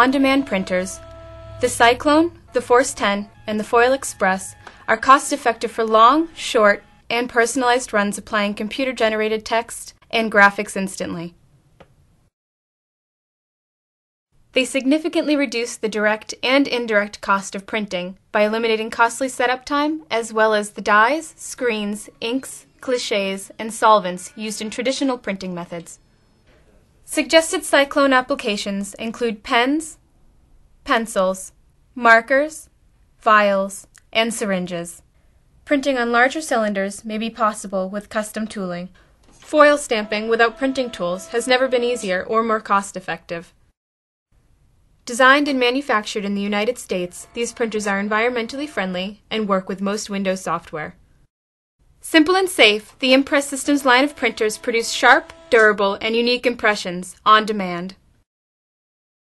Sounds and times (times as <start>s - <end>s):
Speech: 0.0s - 1.0s, 1.6s - 11.4s, 14.6s - 26.0s, 27.1s - 30.0s, 30.9s - 35.0s, 35.7s - 38.9s, 39.5s - 43.5s, 45.1s - 51.0s, 52.0s - 58.0s.